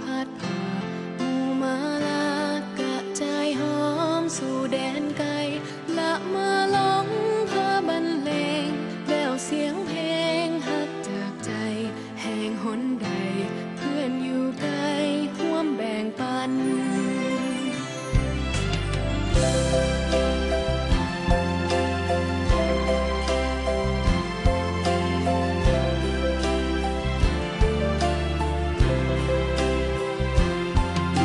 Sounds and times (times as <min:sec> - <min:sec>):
Music: 0:00.0 - 0:31.2.